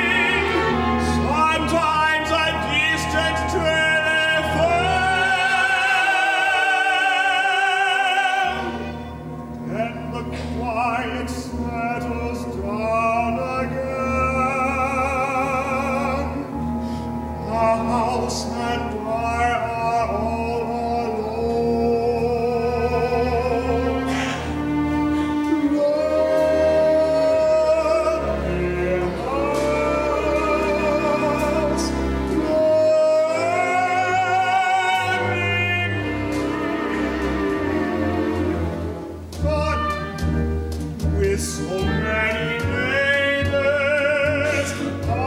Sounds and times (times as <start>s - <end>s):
Classical music: 0.0s - 45.2s
Double bass: 0.0s - 45.2s.